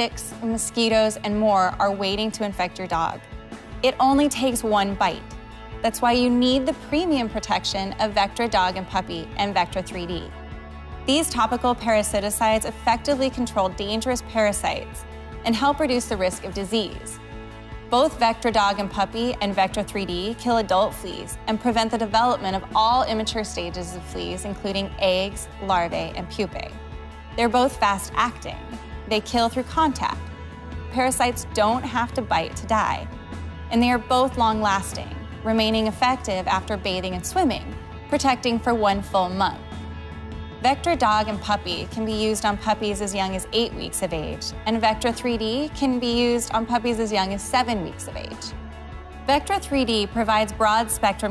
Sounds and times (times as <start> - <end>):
Speech: 0.0 - 3.2, 3.9 - 5.2, 5.8 - 10.3, 11.1 - 17.2, 18.0 - 26.8, 27.4 - 30.2, 31.0 - 33.1, 33.7 - 39.6, 40.6 - 48.5, 49.3 - 51.3
Music: 0.0 - 51.3.